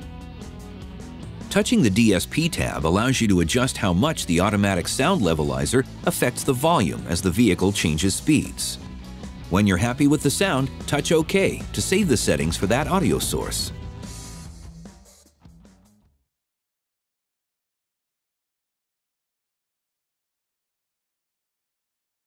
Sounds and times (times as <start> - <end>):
Music: 0.0 - 16.2
Speech: 1.5 - 8.8, 9.5 - 13.8.